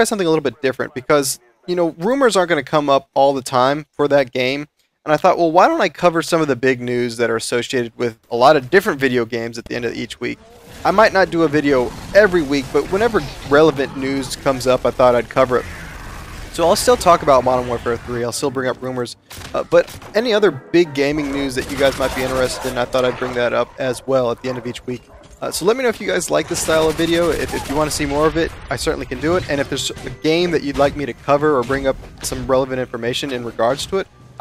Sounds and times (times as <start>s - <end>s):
Speech: 0.0s - 15.7s, 16.6s - 34.4s.